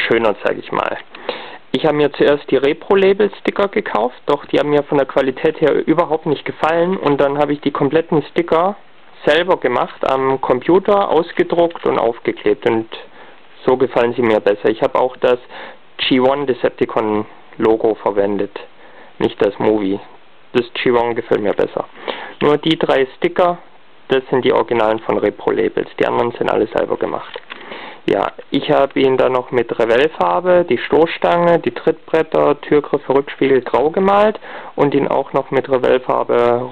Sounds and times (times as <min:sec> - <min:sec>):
Speech: 0:00.0 - 0:01.1, 0:01.7 - 0:27.5, 0:28.1 - 0:36.7.